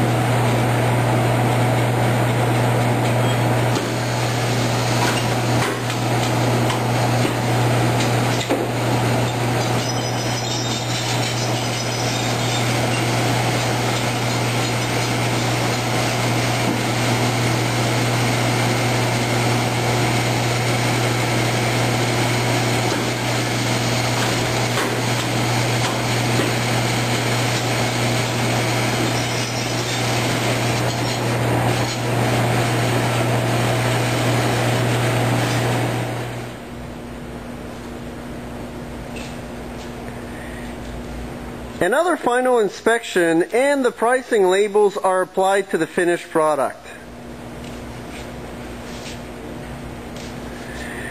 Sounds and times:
Engine: 0:00.0 - 0:37.2, 0:47.0 - 0:51.1.

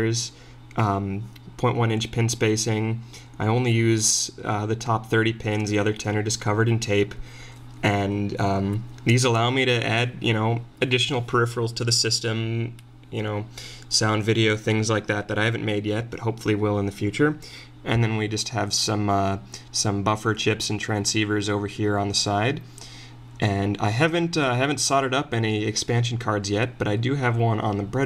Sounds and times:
Speech: 0:00.0 - 0:07.2, 0:07.8 - 0:22.7, 0:23.4 - 0:28.0.

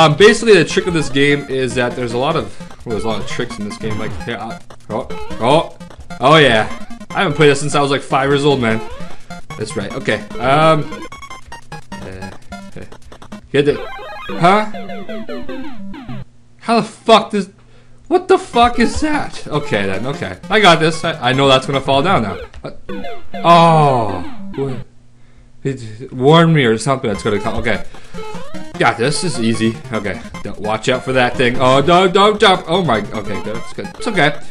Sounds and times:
Speech: 0:00.0 - 0:08.9, 0:09.5 - 0:11.0, 0:12.0 - 0:12.9, 0:13.6 - 0:14.8, 0:16.6 - 0:22.4, 0:23.5 - 0:24.8, 0:25.6 - 0:27.8, 0:28.8 - 0:34.4
Music: 0:00.0 - 0:16.2, 0:19.4 - 0:24.8, 0:27.2 - 0:34.5.

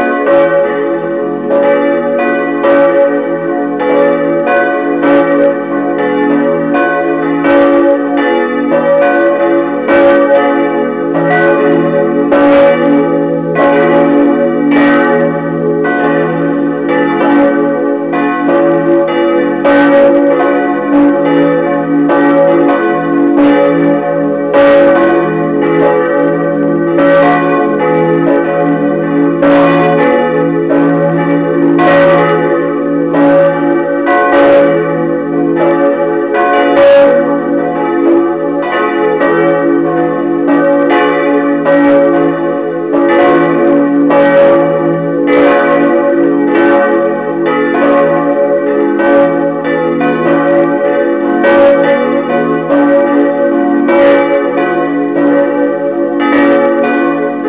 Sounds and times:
Church bell: 0:00.0 - 0:57.4.

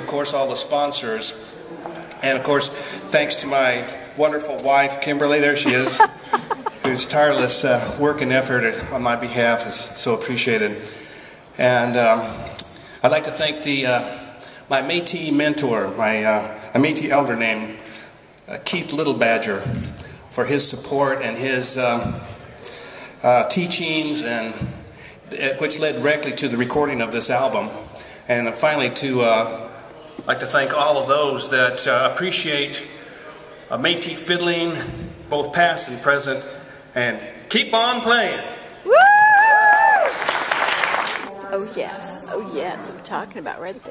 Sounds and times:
Speech: 0:00.0 - 0:06.1, 0:13.0 - 0:17.8, 0:18.5 - 0:22.2.

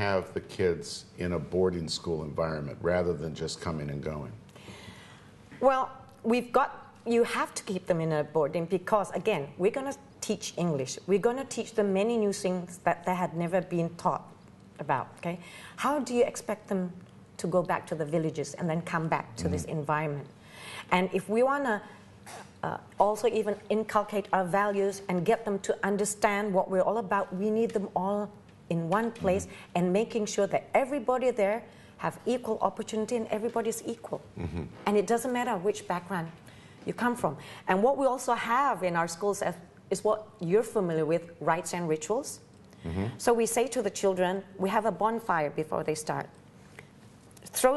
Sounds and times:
Inside, small room: 0:00.0 - 0:47.7.

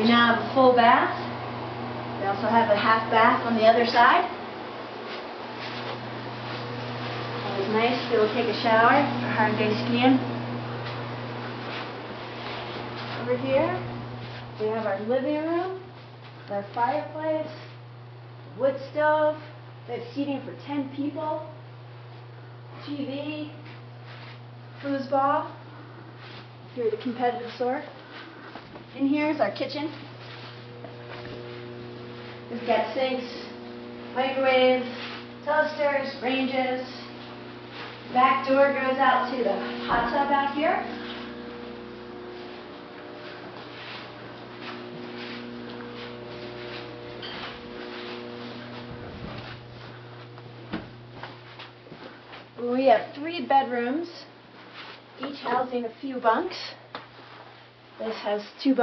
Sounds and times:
Speech: 0:00.0 - 0:01.3, 0:02.2 - 0:04.4, 0:07.4 - 0:10.3, 0:13.2 - 0:13.9, 0:14.6 - 0:15.9, 0:16.5 - 0:17.8, 0:18.6 - 0:21.6, 0:22.8 - 0:23.6, 0:24.8 - 0:25.6, 0:26.8 - 0:28.0, 0:29.0 - 0:30.1, 0:32.5 - 0:33.6, 0:34.2 - 0:37.1, 0:38.1 - 0:41.0, 0:52.6 - 0:54.4, 0:55.2 - 0:56.8, 0:58.0 - 0:58.8.

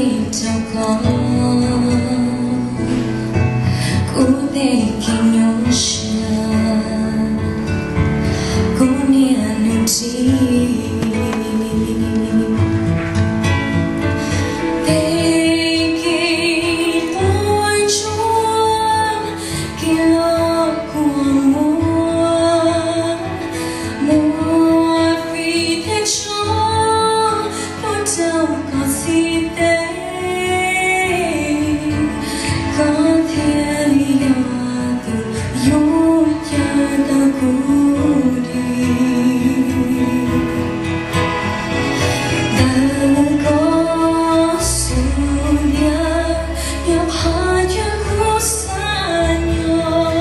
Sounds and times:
Female singing: 0:00.0 - 0:03.2, 0:04.0 - 0:07.8, 0:08.7 - 0:13.0, 0:14.8 - 0:40.8, 0:42.5 - 0:50.2
Music: 0:00.0 - 0:50.2.

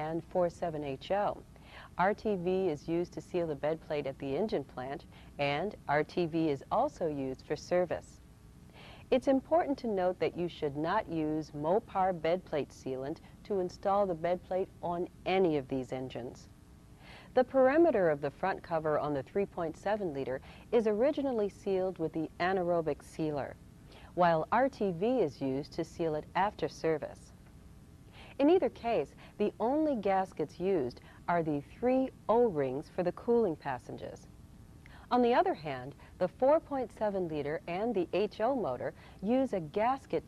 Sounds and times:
Speech: 0:00.0 - 0:08.2, 0:09.1 - 0:16.5, 0:17.4 - 0:27.4, 0:28.4 - 0:34.3, 0:35.1 - 0:40.2.

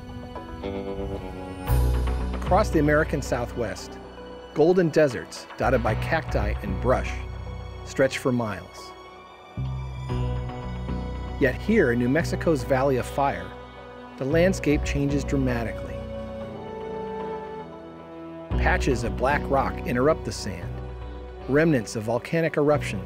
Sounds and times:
Music: 0:00.0 - 0:23.0
Speech: 0:02.4 - 0:04.0, 0:04.6 - 0:07.2, 0:07.9 - 0:08.9, 0:11.4 - 0:13.5, 0:14.2 - 0:16.0, 0:18.6 - 0:20.8, 0:21.5 - 0:23.0.

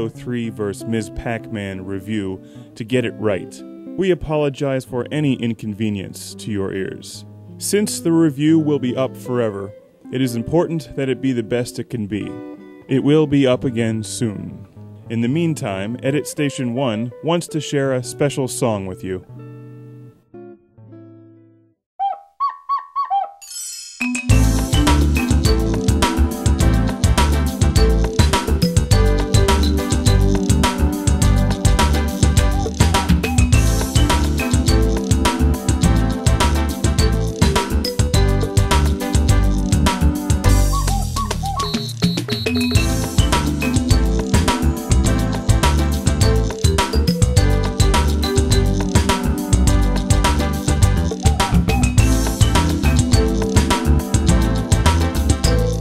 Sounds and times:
Speech: 0:00.0 - 0:19.3
Music: 0:00.0 - 0:21.8, 0:23.4 - 0:55.8.

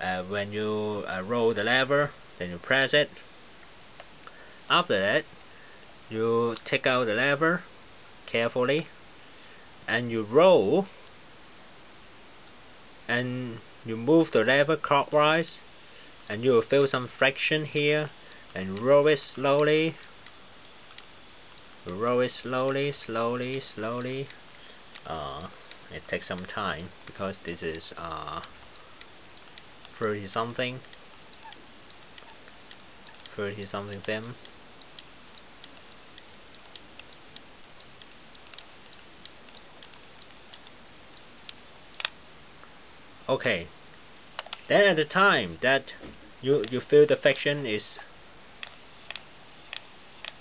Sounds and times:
Speech: 0:00.0 - 0:03.2, 0:04.7 - 0:05.3, 0:06.1 - 0:07.7, 0:08.3 - 0:08.9, 0:09.9 - 0:10.9, 0:13.1 - 0:15.6, 0:16.3 - 0:20.0, 0:21.9 - 0:24.4, 0:25.0 - 0:28.5, 0:30.0 - 0:30.9, 0:33.3 - 0:34.4, 0:43.3 - 0:43.8, 0:44.7 - 0:48.1.

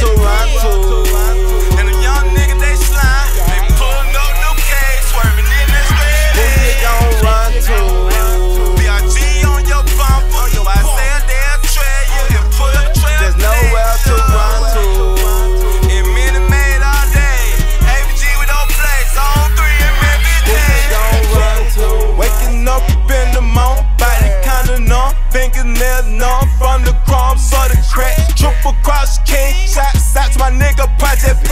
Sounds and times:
Music: 0:00.0 - 0:31.5.

